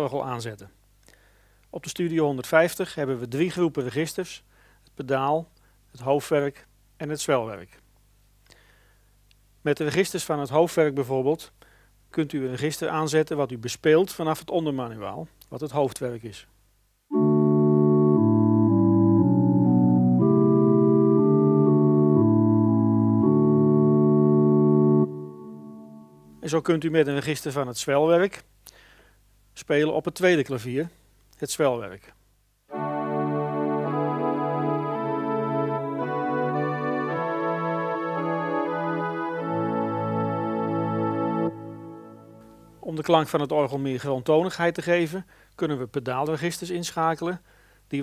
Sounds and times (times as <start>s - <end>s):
Speech: 0.0s - 0.8s, 1.7s - 4.4s, 5.0s - 7.8s, 9.6s - 16.5s, 26.4s - 28.5s, 29.6s - 32.2s, 42.8s - 48.0s
Piano: 17.1s - 26.5s, 32.7s - 42.9s.